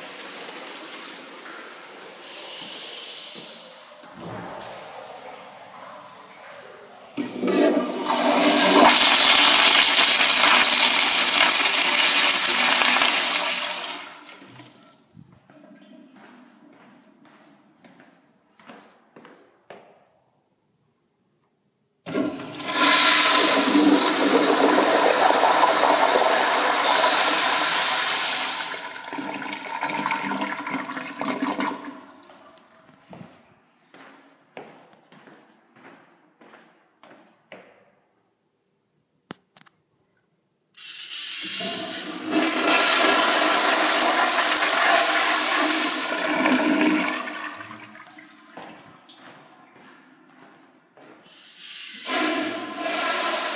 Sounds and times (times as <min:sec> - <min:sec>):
Toilet flush: 0:00.0 - 0:04.8, 0:07.2 - 0:14.8, 0:22.1 - 0:32.4, 0:40.8 - 0:48.6, 0:51.4 - 0:53.5.